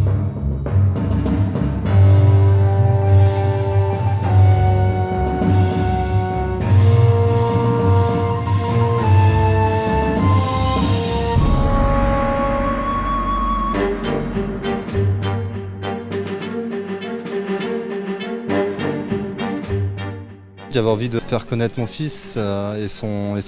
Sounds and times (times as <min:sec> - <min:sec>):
Music: 0:00.0 - 0:23.4
Speech: 0:20.7 - 0:23.4.